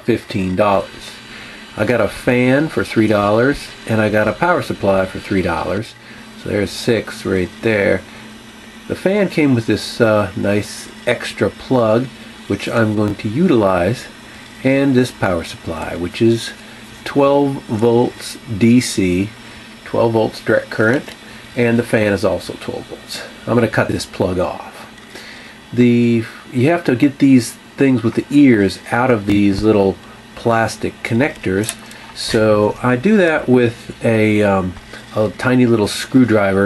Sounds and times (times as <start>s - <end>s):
Speech: 0.0s - 8.2s, 8.9s - 25.0s, 25.7s - 36.6s.